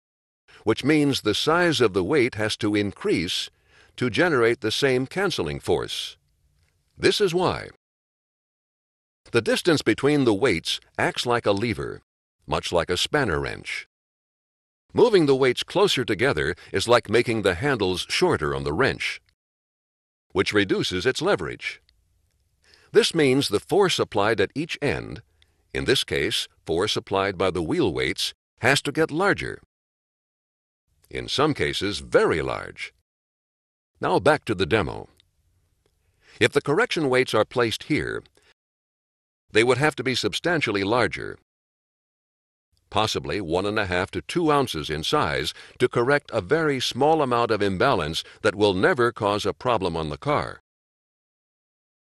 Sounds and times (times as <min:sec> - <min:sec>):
Speech: 0:00.6 - 0:06.2, 0:07.0 - 0:07.8, 0:09.3 - 0:13.9, 0:14.9 - 0:19.3, 0:20.4 - 0:21.8, 0:22.9 - 0:25.2, 0:25.8 - 0:29.7, 0:31.1 - 0:33.0, 0:34.0 - 0:35.2, 0:36.4 - 0:38.3, 0:39.5 - 0:41.4, 0:42.9 - 0:50.6.